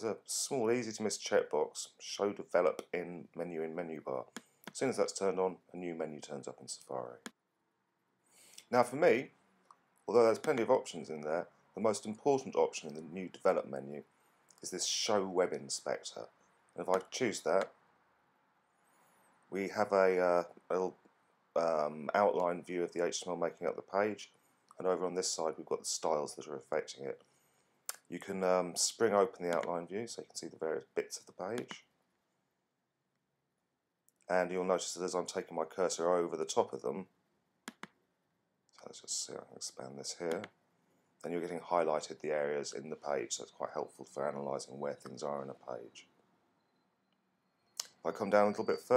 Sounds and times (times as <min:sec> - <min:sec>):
Speech: 0:00.0 - 0:07.3, 0:08.6 - 0:09.3, 0:10.1 - 0:14.0, 0:14.6 - 0:17.7, 0:19.5 - 0:21.0, 0:21.6 - 0:27.2, 0:27.9 - 0:31.9, 0:34.2 - 0:37.1, 0:38.7 - 0:40.5, 0:41.2 - 0:46.1, 0:47.8 - 0:48.9.